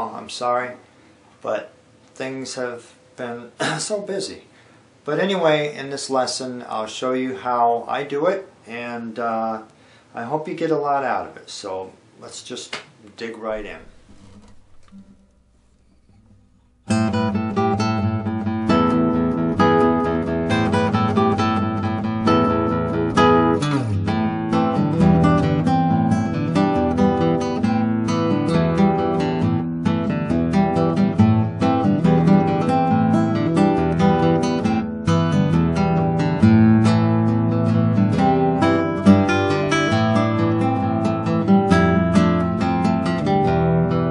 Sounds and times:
Strum: 13.4s - 44.1s
Acoustic guitar: 13.6s - 44.1s.

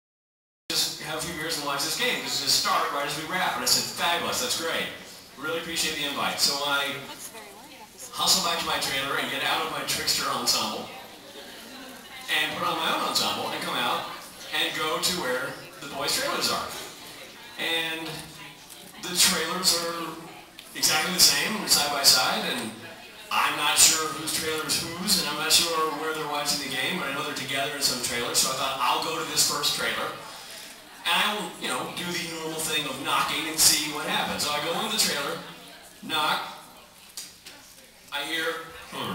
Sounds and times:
Speech: 0.7s - 39.1s.

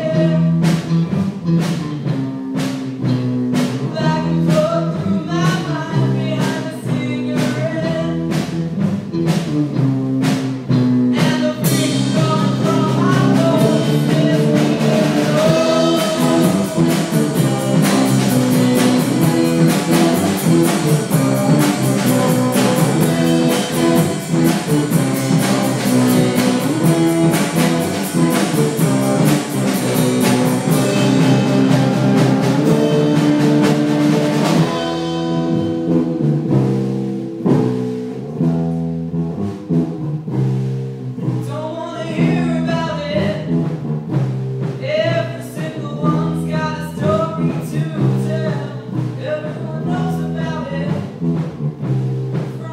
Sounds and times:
Music: 0.0s - 52.7s
Female singing: 3.8s - 8.2s, 11.2s - 18.0s.

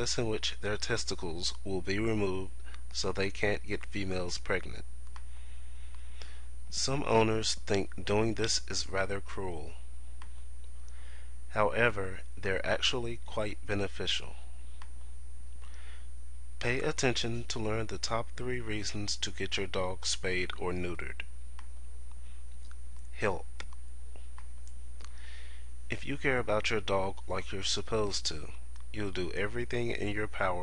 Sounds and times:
Speech: 0.0s - 4.9s, 6.7s - 9.8s, 11.5s - 14.5s, 16.6s - 21.3s, 23.1s - 23.7s, 25.9s - 30.6s.

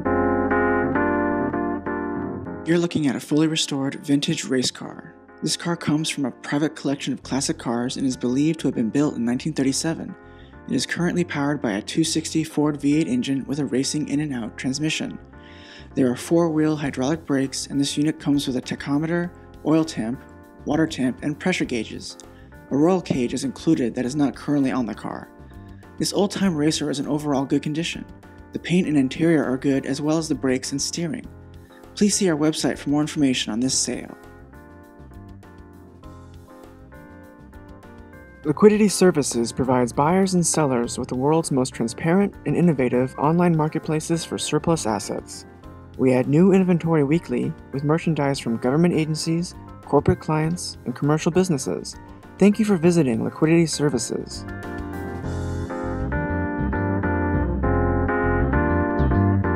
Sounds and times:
Music: 0.0s - 59.5s
Speech: 2.7s - 15.2s, 15.8s - 25.3s, 26.0s - 31.3s, 32.0s - 34.2s, 38.5s - 54.4s.

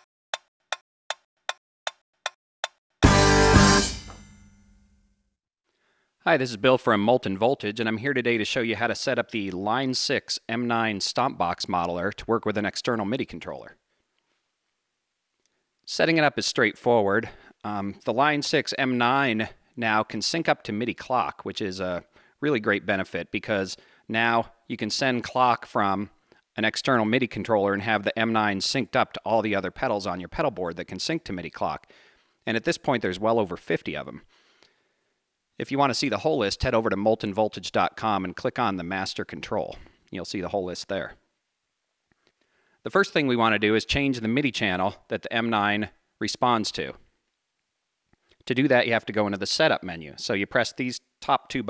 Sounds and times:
Speech: 6.2s - 13.8s, 15.9s - 34.3s, 35.6s - 41.2s, 42.9s - 47.0s, 48.4s - 51.6s.

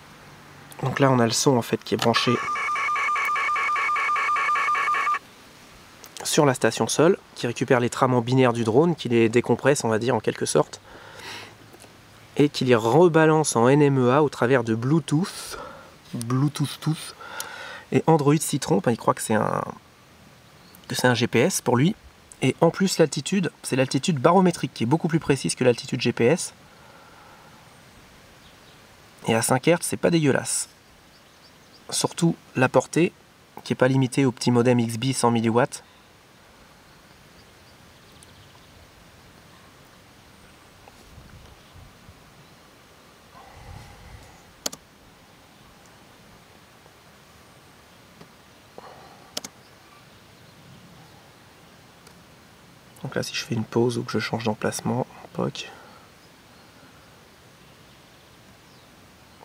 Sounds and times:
Speech: 0.8s - 2.5s, 6.2s - 10.8s, 12.4s - 17.2s, 17.9s - 19.8s, 20.9s - 26.6s, 29.2s - 30.7s, 31.9s - 35.8s, 53.0s - 55.8s.

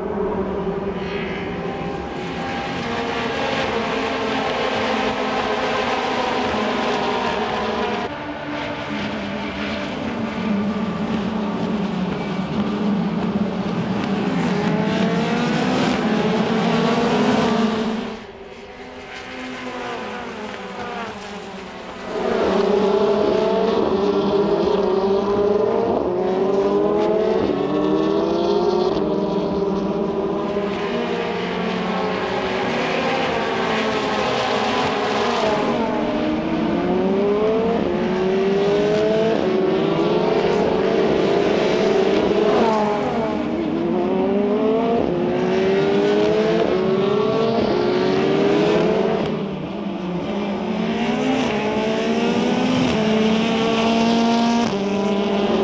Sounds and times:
Race car, auto racing: 0.0s - 55.6s.

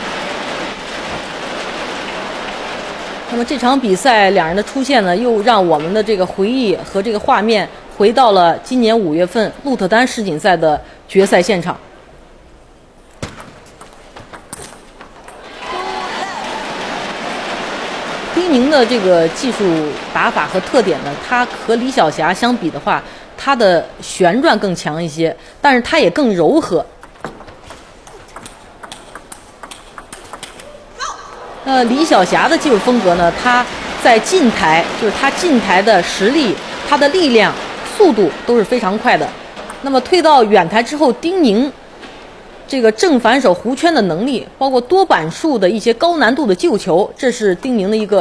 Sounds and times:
Speech: 3.3s - 11.8s, 18.4s - 26.9s, 31.0s - 41.8s, 42.7s - 48.2s.

